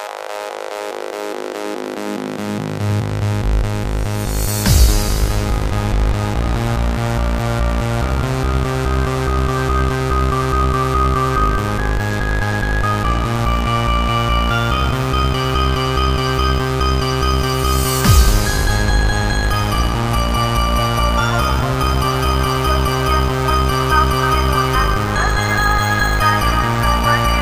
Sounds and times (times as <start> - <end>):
Techno: 0.0 - 27.4.